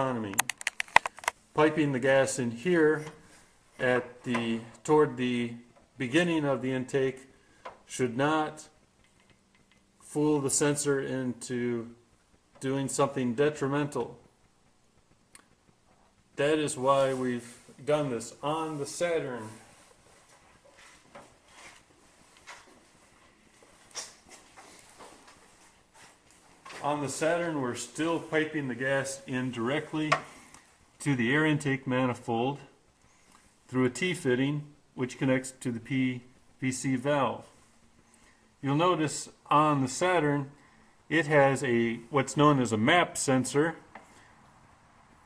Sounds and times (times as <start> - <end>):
Speech: 0.0 - 0.5, 1.6 - 3.2, 3.8 - 7.3, 7.9 - 8.8, 10.0 - 12.0, 12.6 - 14.2, 16.4 - 19.7, 26.8 - 30.3, 31.0 - 32.8, 33.7 - 37.5, 38.6 - 43.9.